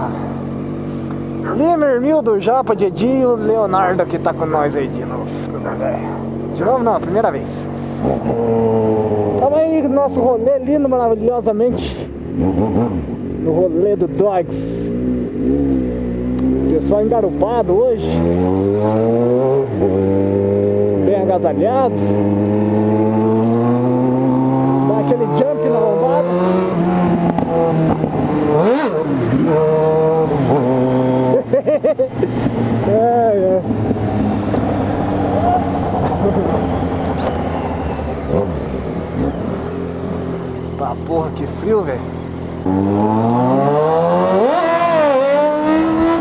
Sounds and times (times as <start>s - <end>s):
Speech: 1.5s - 7.7s, 9.4s - 12.1s, 13.4s - 14.9s, 16.7s - 18.2s, 21.0s - 22.0s, 24.8s - 26.4s, 40.8s - 42.1s.